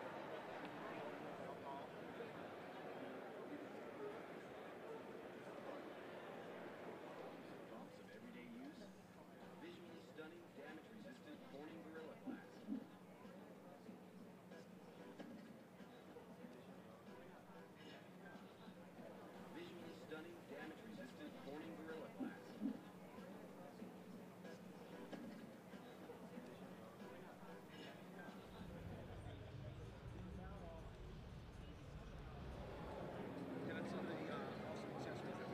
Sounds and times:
Speech: 0.0s - 35.5s.

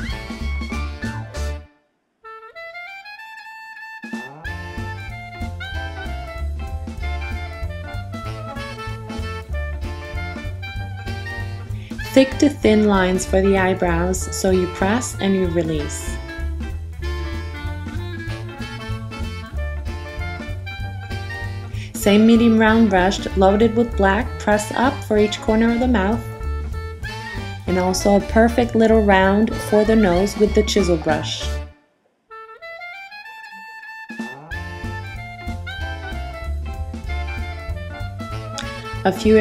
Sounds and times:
Music: 0.0s - 39.4s.

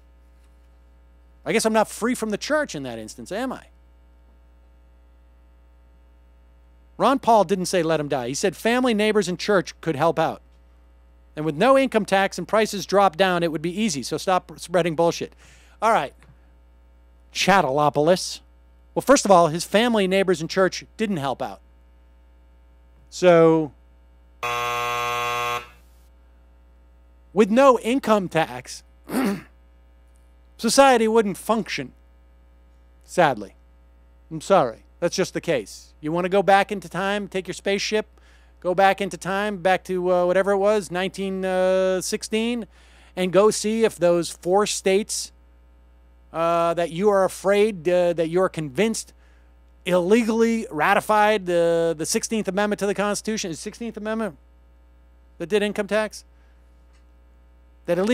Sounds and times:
Speech: 1.4s - 3.7s, 7.0s - 10.4s, 11.4s - 16.2s, 17.4s - 21.6s, 23.1s - 23.8s, 27.4s - 28.9s, 30.6s - 32.0s, 33.1s - 33.6s, 34.3s - 45.4s, 46.3s - 49.1s, 49.9s - 54.4s, 55.4s - 56.3s, 57.9s - 58.1s
Buzzer: 24.4s - 26.0s.

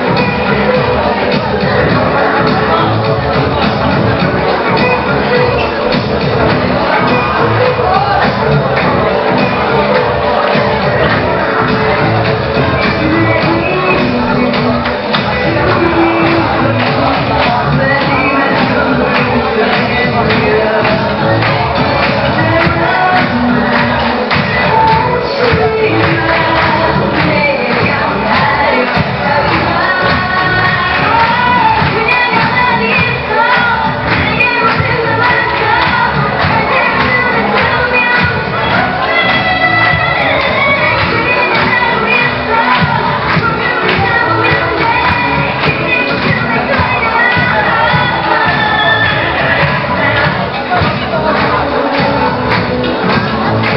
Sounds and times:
Music: 0.0s - 53.7s
Speech: 0.0s - 53.7s.

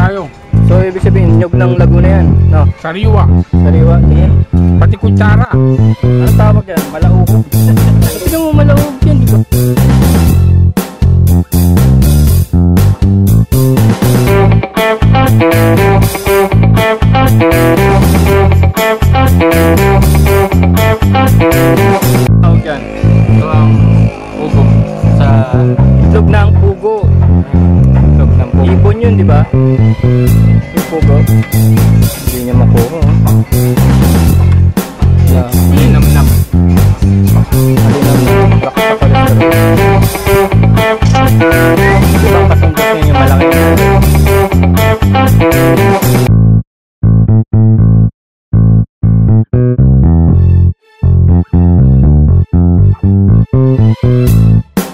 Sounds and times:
Speech: 0.0s - 9.5s, 22.4s - 27.1s, 28.0s - 29.6s, 30.8s - 31.4s, 32.1s - 33.2s, 35.3s - 36.4s, 37.5s - 39.3s, 41.0s - 43.8s
Music: 0.0s - 46.3s, 49.2s - 54.9s.

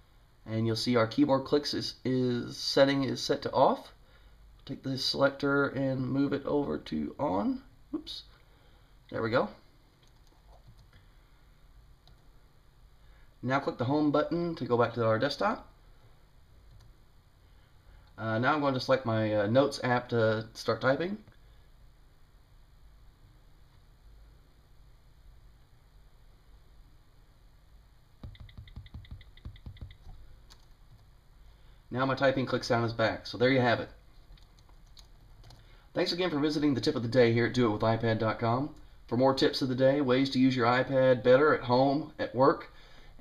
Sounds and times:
Speech: 0.4s - 4.0s, 4.6s - 8.3s, 9.1s - 9.7s, 13.4s - 15.8s, 18.2s - 21.3s, 31.9s - 34.0s, 36.0s - 42.8s
Typing: 28.2s - 31.1s.

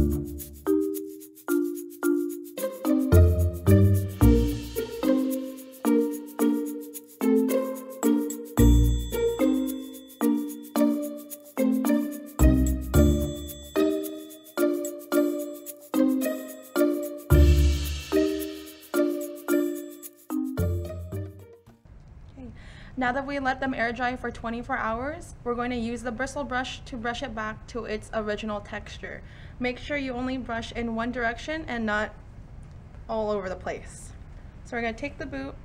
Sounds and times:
Music: 0.0s - 21.8s.

